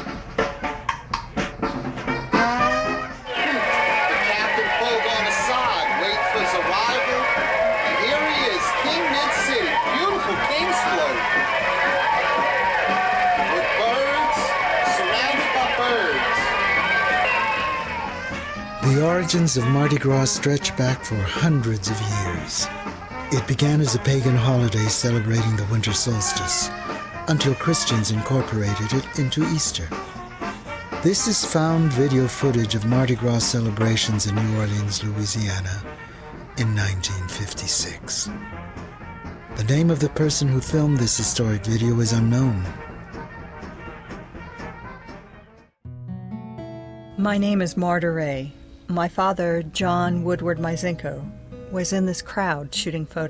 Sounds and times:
Music: 0:00.0 - 0:53.2
Speech: 0:07.9 - 0:11.2, 0:18.8 - 0:22.7, 0:23.3 - 0:26.7, 0:27.3 - 0:30.0, 0:31.0 - 0:35.9, 0:36.6 - 0:38.3, 0:39.6 - 0:42.8, 0:47.2 - 0:53.2.

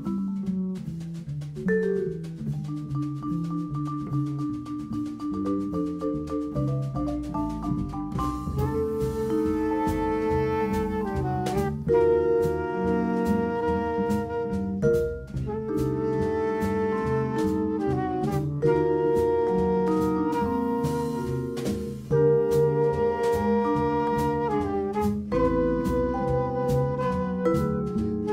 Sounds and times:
Jazz: 0:00.0 - 0:28.3.

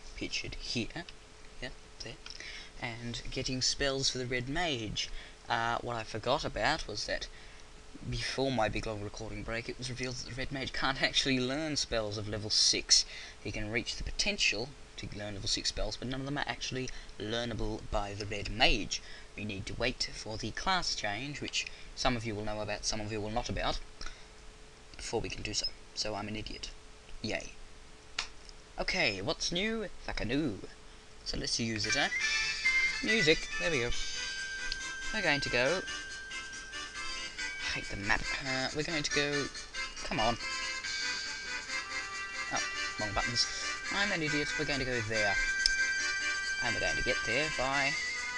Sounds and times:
Speech: 0:00.2 - 0:02.2, 0:02.8 - 0:07.3, 0:08.0 - 0:23.9, 0:25.0 - 0:27.6, 0:28.8 - 0:32.2, 0:33.0 - 0:34.0, 0:35.1 - 0:35.9, 0:37.6 - 0:40.4, 0:42.5 - 0:45.4, 0:46.6 - 0:48.0.

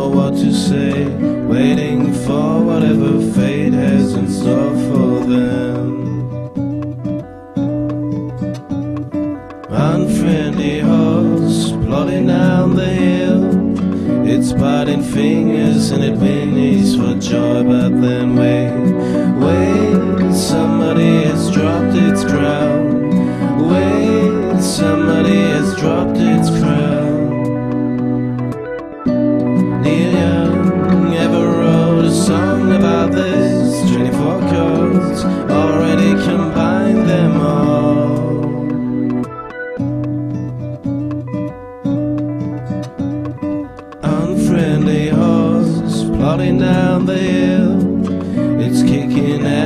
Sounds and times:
Music: 0:00.0 - 0:49.6.

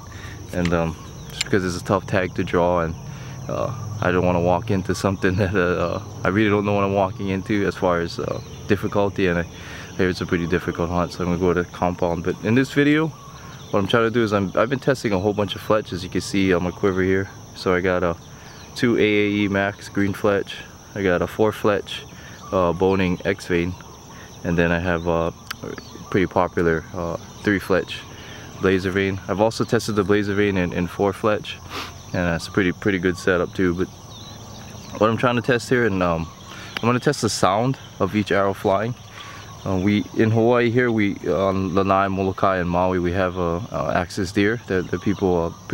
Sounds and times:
Speech: 0:00.5 - 0:18.2, 0:18.8 - 0:23.8, 0:24.4 - 0:33.9, 0:34.9 - 0:45.7.

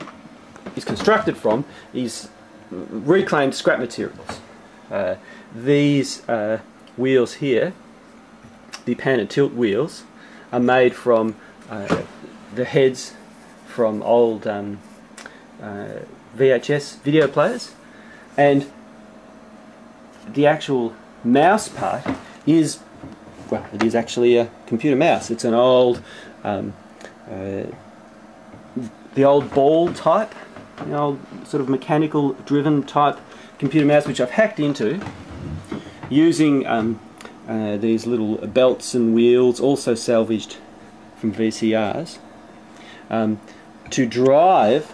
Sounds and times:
Speech: 0:00.7 - 0:07.8, 0:08.8 - 0:14.9, 0:15.6 - 0:17.8, 0:18.4 - 0:18.8, 0:20.2 - 0:27.8, 0:28.7 - 0:35.2, 0:36.1 - 0:42.3, 0:43.0 - 0:44.9.

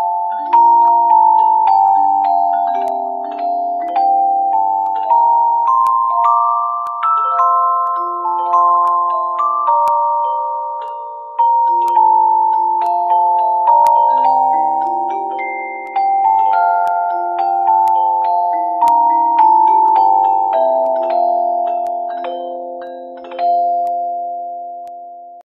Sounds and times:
Lullaby: 0:00.0 - 0:25.4.

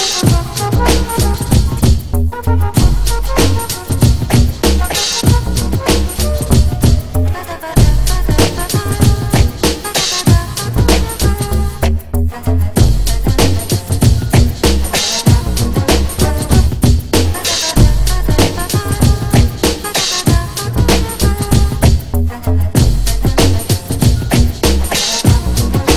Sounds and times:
Dubstep: 0:00.0 - 0:25.9.

